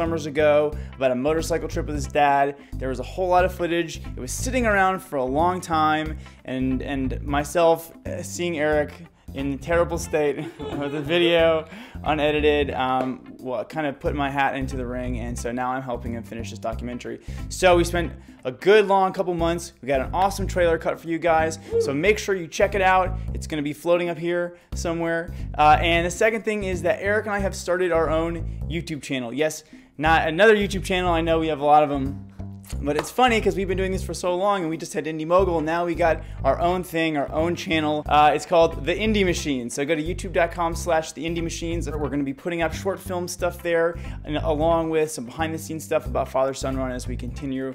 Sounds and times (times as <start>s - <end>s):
Music: 0.0s - 47.7s
Speech: 0.0s - 47.7s.